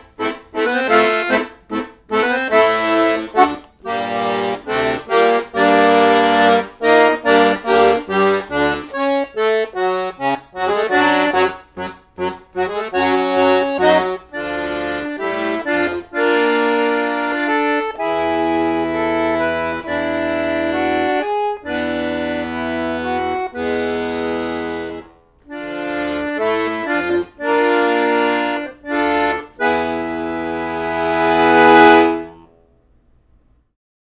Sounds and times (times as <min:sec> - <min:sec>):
Accordion: 0:00.0 - 0:32.5.